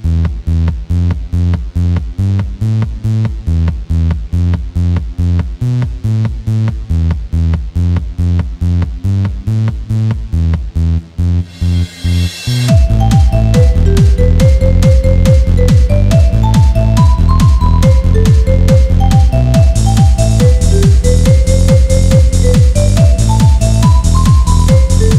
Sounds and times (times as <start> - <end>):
Techno: 0.0 - 25.1.